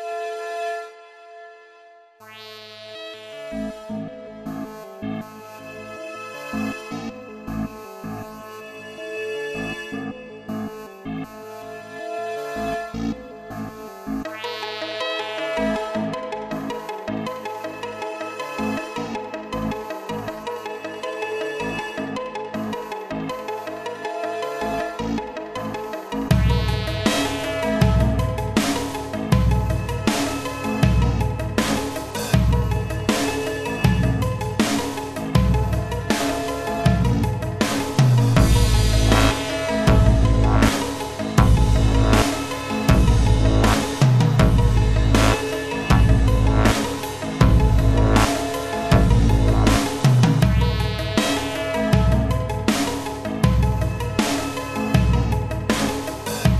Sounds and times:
Music: 0.0s - 56.5s.

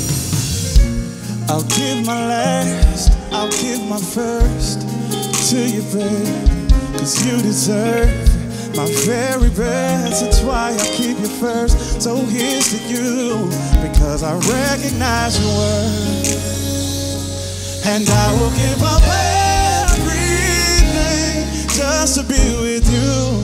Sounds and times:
Music: 0.0s - 23.4s.

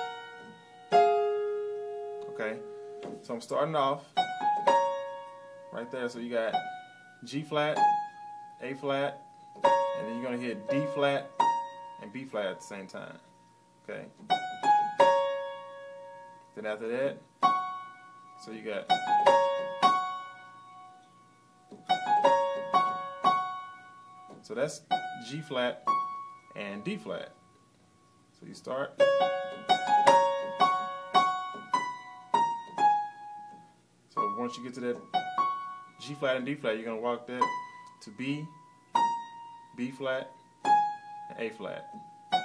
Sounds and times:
Piano: 0.0s - 3.3s, 4.0s - 12.7s, 13.4s - 16.6s, 17.3s - 27.3s, 28.9s - 36.5s, 37.4s - 38.1s, 38.8s - 42.4s.

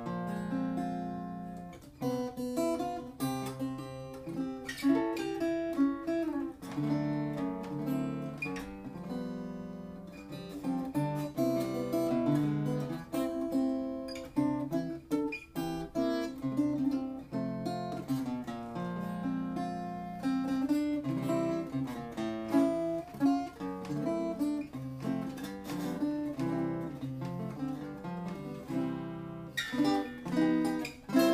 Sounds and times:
Music: 0.0s - 31.3s.

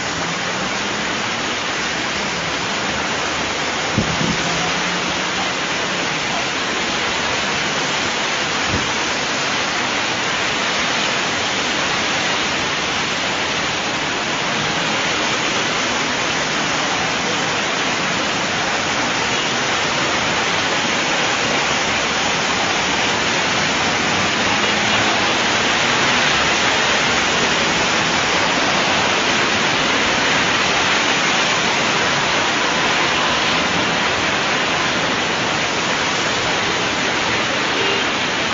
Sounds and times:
Bus: 0.0s - 38.5s.

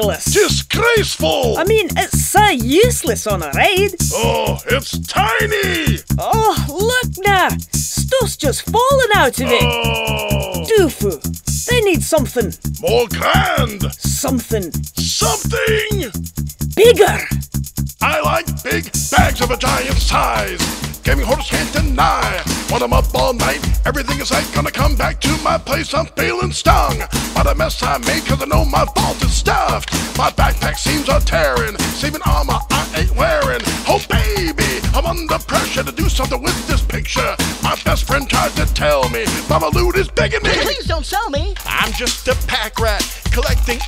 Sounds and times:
Speech: 0.0s - 16.2s, 16.8s - 17.4s, 18.0s - 20.5s, 21.1s - 23.6s, 32.0s - 37.3s, 37.9s - 43.8s
Soundtrack music: 1.6s - 16.2s, 16.8s - 17.4s, 18.0s - 26.0s, 26.7s - 40.8s.

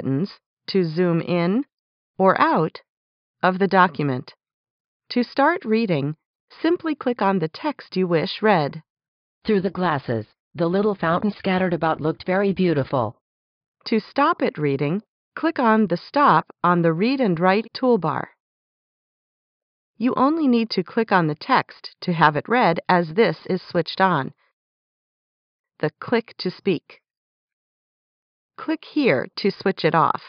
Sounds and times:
Speech: 0.0s - 4.4s, 5.1s - 8.8s, 9.5s - 13.2s, 13.9s - 18.3s, 20.0s - 24.4s, 25.8s - 27.0s, 28.6s - 30.2s.

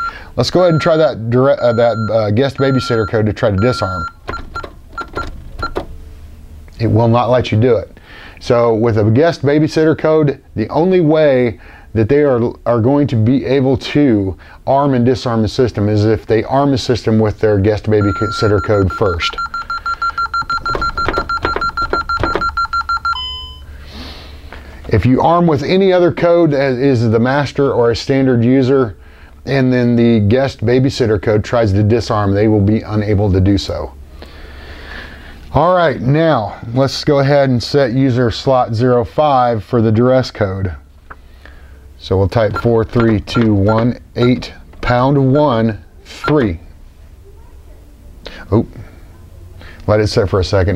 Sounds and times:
Speech: 0.4s - 4.1s, 6.8s - 19.4s, 24.9s - 34.0s, 35.5s - 40.8s, 42.0s - 50.7s.

